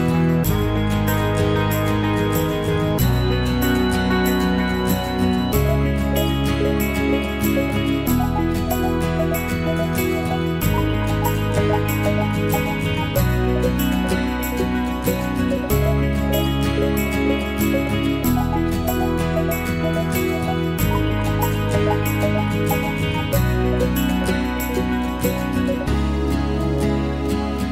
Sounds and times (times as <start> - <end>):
Music: 0.0 - 27.7.